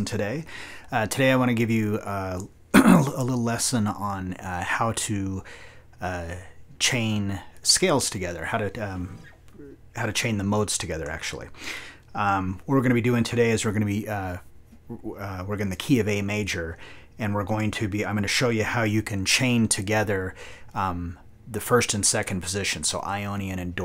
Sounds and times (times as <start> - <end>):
Speech: 0.0 - 11.6, 12.2 - 23.8.